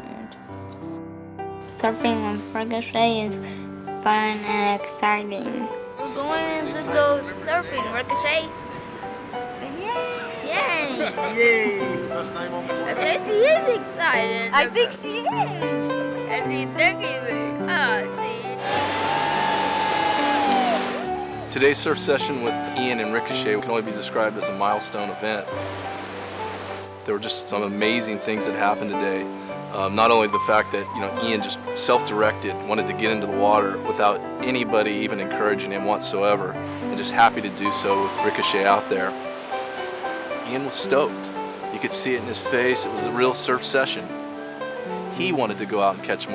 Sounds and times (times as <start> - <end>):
Wind: 3.8 - 16.2, 25.4 - 27.2, 38.0 - 41.8
Waves, surf: 6.6 - 13.5, 18.6 - 27.1, 36.7 - 46.3.